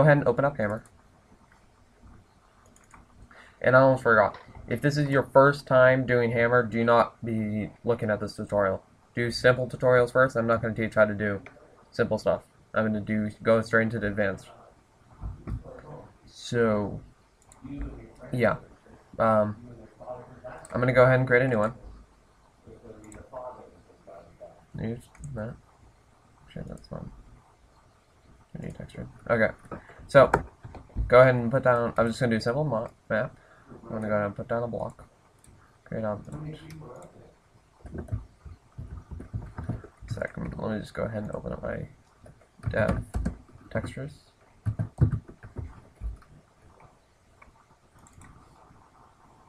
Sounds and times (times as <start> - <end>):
Speech: 0.0 - 0.8, 3.6 - 14.8, 15.6 - 17.0, 17.6 - 22.0, 22.7 - 25.6, 26.5 - 27.1, 28.6 - 30.4, 31.0 - 35.0, 35.9 - 37.4, 40.1 - 42.0, 42.6 - 43.1, 43.7 - 44.3.